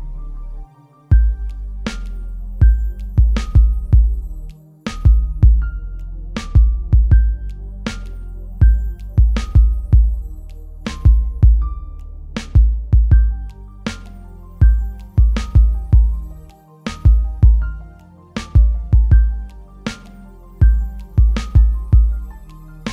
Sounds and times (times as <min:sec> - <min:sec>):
Soundtrack music: 0:00.0 - 0:22.9.